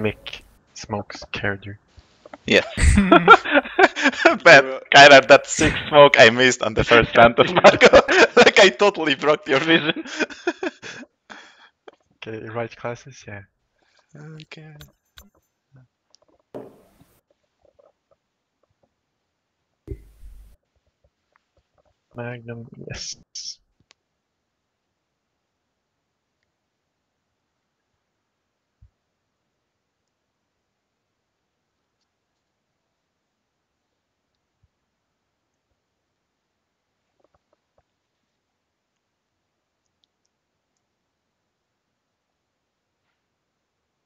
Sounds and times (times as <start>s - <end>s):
Silence: 23.9s - 44.0s.